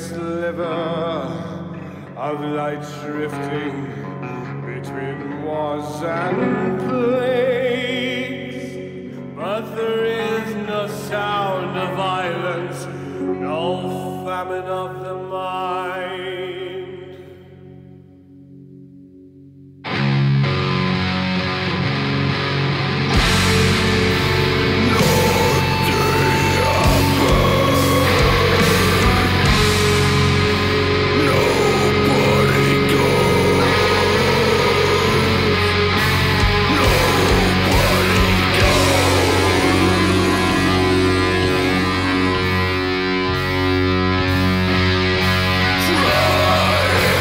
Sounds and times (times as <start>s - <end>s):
Heavy metal: 19.9s - 47.2s.